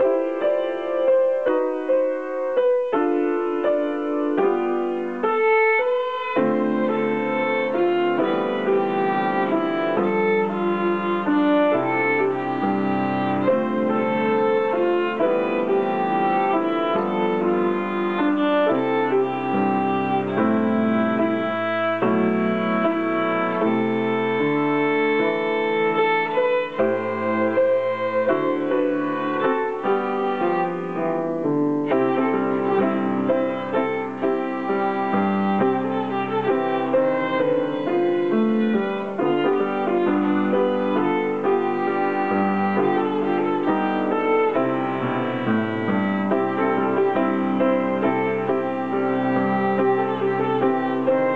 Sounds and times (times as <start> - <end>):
Violin, fiddle: 0.0 - 51.3.